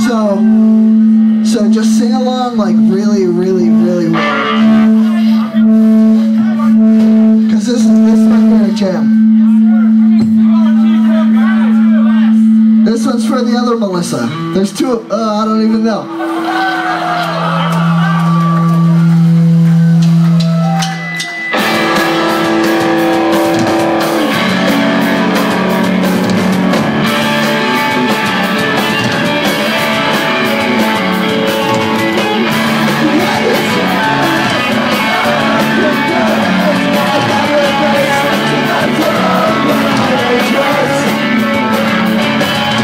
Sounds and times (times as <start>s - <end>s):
Music: 0.0s - 42.8s
Speech: 1.4s - 4.2s, 7.5s - 16.1s.